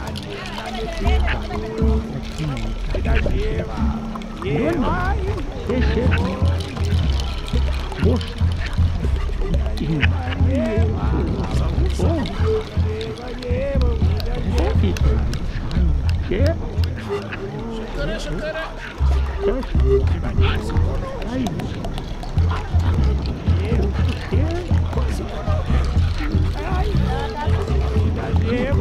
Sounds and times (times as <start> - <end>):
Crowd: 0.0 - 28.8.